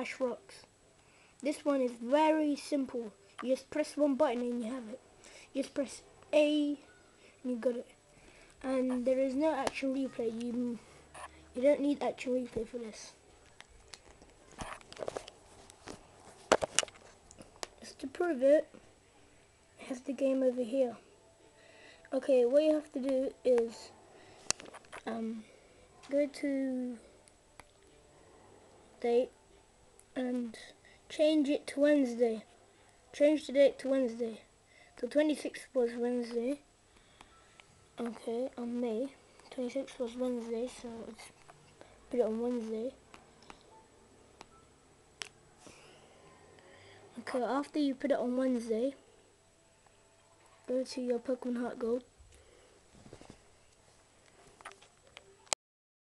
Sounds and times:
Speech: 0:00.0 - 0:00.7, 0:01.4 - 0:08.0, 0:08.6 - 0:13.2, 0:17.8 - 0:18.7, 0:19.8 - 0:21.0, 0:22.1 - 0:23.9, 0:25.0 - 0:27.1, 0:29.0 - 0:29.4, 0:30.2 - 0:32.5, 0:33.1 - 0:36.6, 0:38.0 - 0:41.3, 0:42.1 - 0:43.0, 0:47.1 - 0:49.0, 0:50.6 - 0:52.1
Inside, small room: 0:00.0 - 0:55.6.

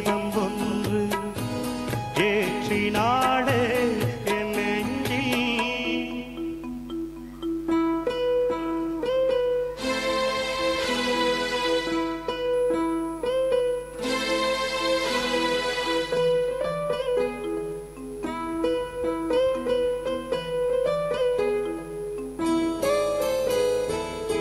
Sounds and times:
Pizzicato: 0:00.0 - 0:24.4.

